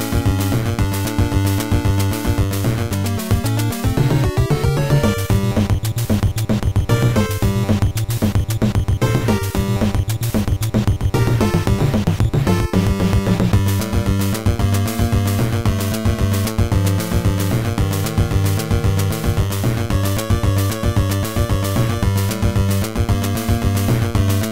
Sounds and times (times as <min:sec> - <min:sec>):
Video game music: 0:00.0 - 0:24.5.